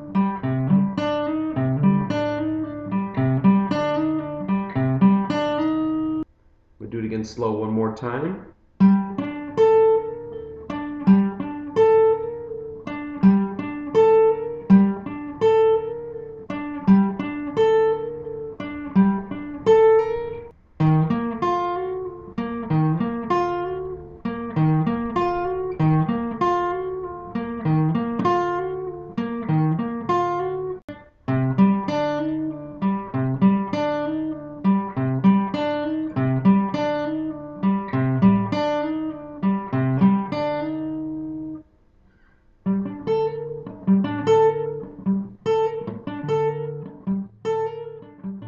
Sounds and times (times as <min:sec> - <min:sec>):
Acoustic guitar: 0:00.0 - 0:06.3, 0:08.2 - 0:48.4.